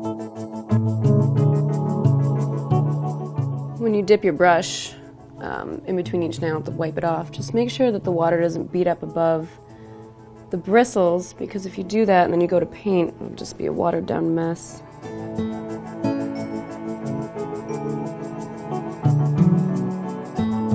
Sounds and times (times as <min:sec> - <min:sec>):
New-age music: 0:00.0 - 0:20.7.